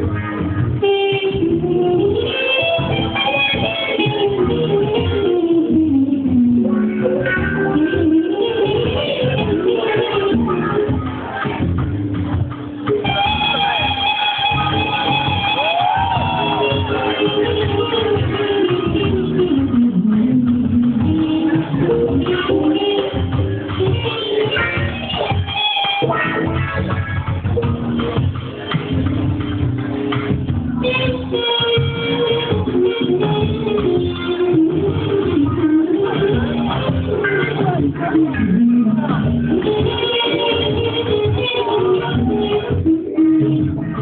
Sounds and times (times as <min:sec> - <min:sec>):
Electric guitar: 0:00.0 - 0:44.0.